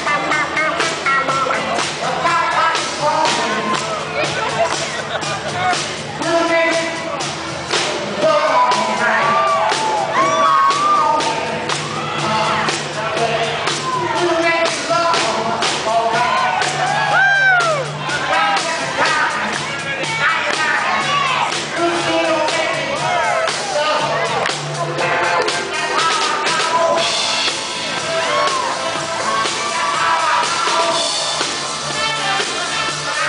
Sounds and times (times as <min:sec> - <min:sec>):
Singing: 0:07.8 - 0:27.3.